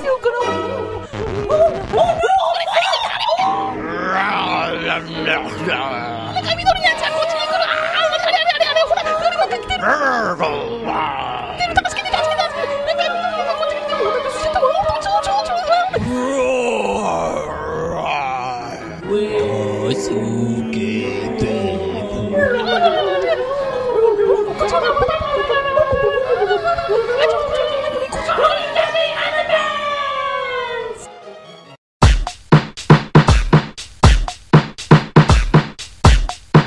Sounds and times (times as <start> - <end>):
Music: 0.0 - 36.6.